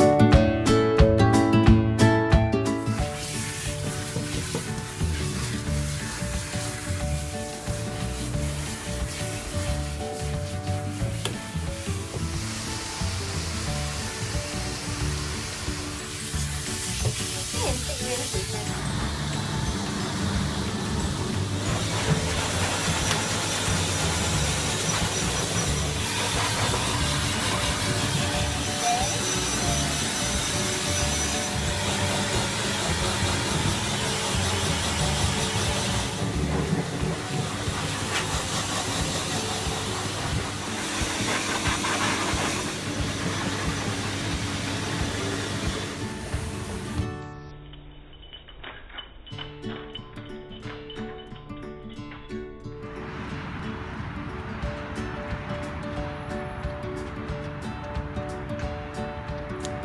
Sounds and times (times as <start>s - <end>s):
Music: 0.0s - 59.8s.